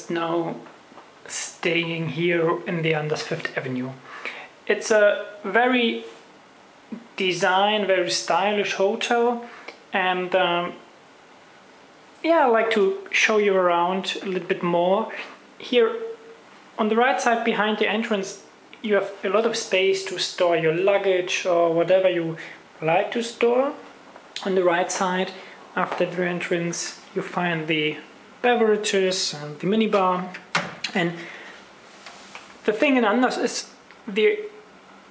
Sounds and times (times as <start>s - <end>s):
Speech: 0.0s - 6.2s, 6.9s - 10.9s, 12.2s - 31.3s, 32.6s - 34.7s.